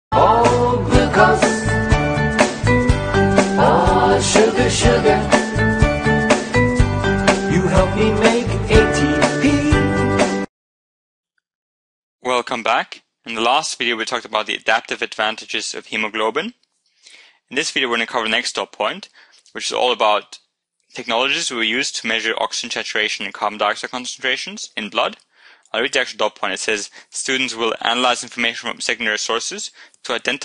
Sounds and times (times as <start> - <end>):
Music: 0.1 - 10.5.